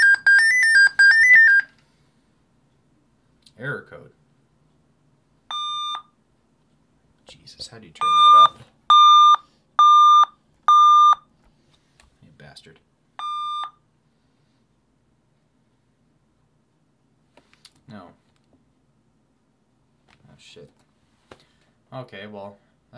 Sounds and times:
Inside, small room: 0:00.0 - 0:22.9
Speech: 0:03.5 - 0:04.2, 0:07.2 - 0:08.3, 0:12.2 - 0:12.9, 0:17.9 - 0:18.2, 0:20.2 - 0:20.8, 0:21.9 - 0:22.9.

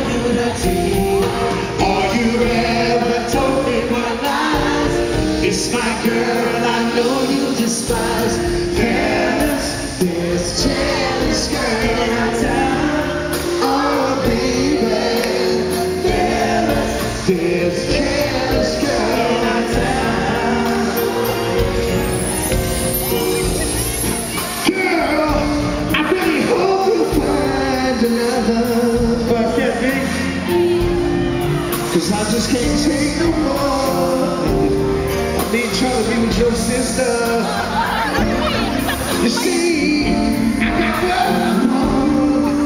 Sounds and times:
Male singing: 0:00.0 - 0:21.2, 0:24.6 - 0:30.6, 0:31.9 - 0:38.1, 0:39.1 - 0:42.6
Music: 0:00.0 - 0:42.6.

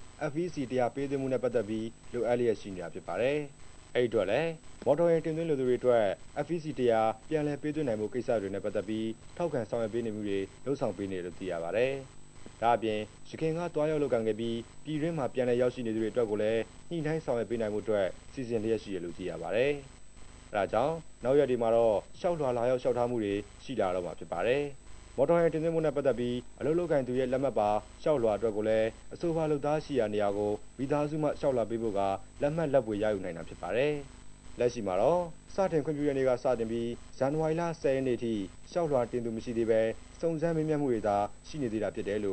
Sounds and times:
Speech: 0:00.2 - 0:19.9, 0:20.5 - 0:42.3.

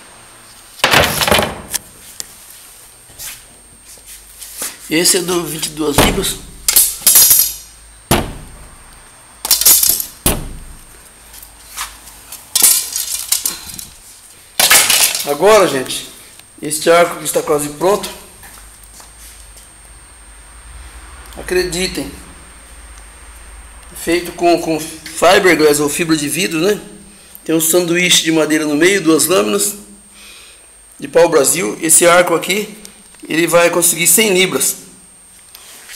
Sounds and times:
Speech: 0:04.9 - 0:06.5, 0:15.2 - 0:18.3, 0:21.4 - 0:22.2, 0:23.9 - 0:29.9, 0:31.0 - 0:34.9.

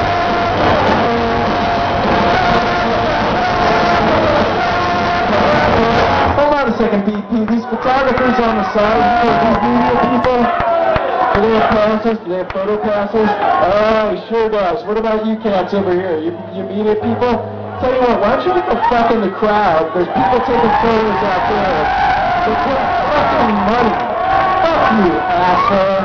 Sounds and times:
Music: 0:00.0 - 0:10.4, 0:12.9 - 0:26.0
Crowd: 0:00.0 - 0:26.0
Speech: 0:06.4 - 0:10.6, 0:11.4 - 0:21.9, 0:22.5 - 0:24.0, 0:24.6 - 0:26.0.

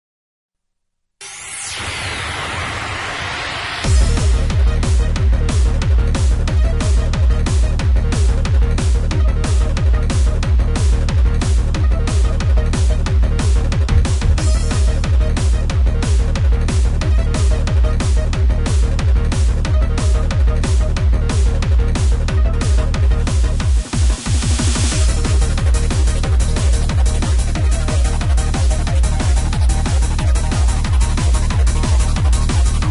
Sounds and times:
Music: 0:01.2 - 0:32.9.

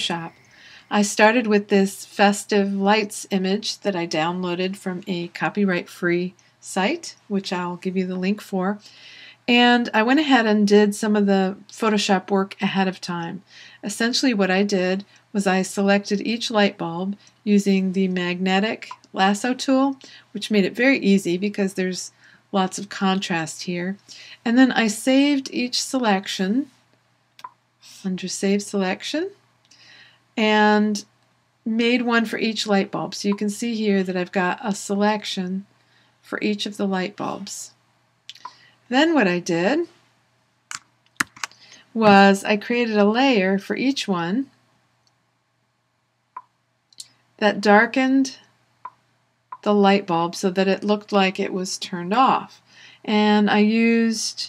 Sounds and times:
Speech: 0:00.0 - 0:26.7, 0:27.9 - 0:29.4, 0:30.4 - 0:31.1, 0:31.7 - 0:40.0, 0:41.4 - 0:44.6, 0:47.4 - 0:48.5, 0:49.6 - 0:54.4.

